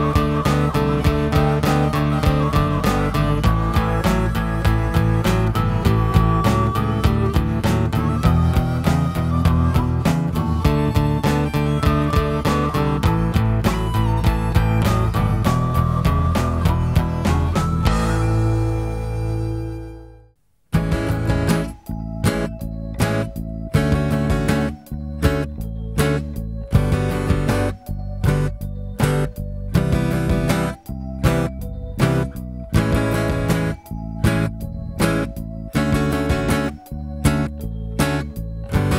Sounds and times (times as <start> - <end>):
Strum: 0.0 - 38.9.